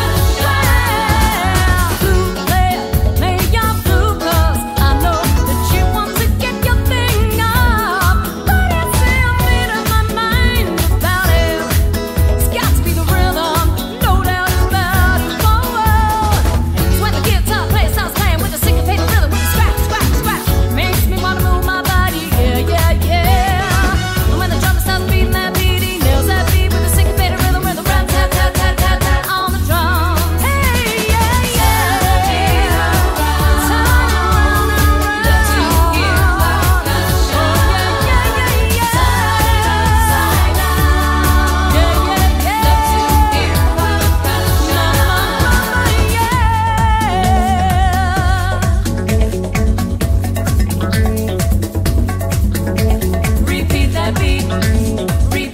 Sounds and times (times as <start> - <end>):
Music of Asia: 0.0 - 55.5.